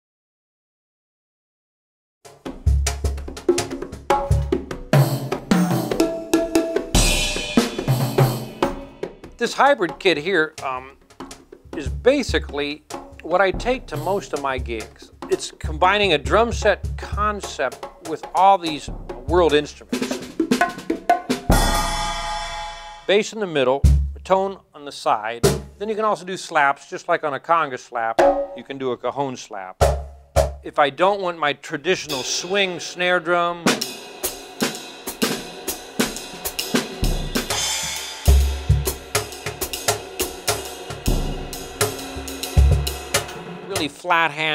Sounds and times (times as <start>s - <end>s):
Drum kit: 2.3s - 23.2s, 23.8s - 24.4s, 25.4s - 25.9s, 28.2s - 28.8s, 29.8s - 30.8s, 32.0s - 44.5s
Snare drum: 2.4s - 23.0s, 25.4s - 25.8s, 28.2s - 28.6s, 29.8s - 30.6s, 33.6s - 44.3s
Speech: 9.4s - 11.0s, 11.8s - 20.2s, 23.1s - 29.8s, 30.6s - 33.8s, 43.7s - 44.5s.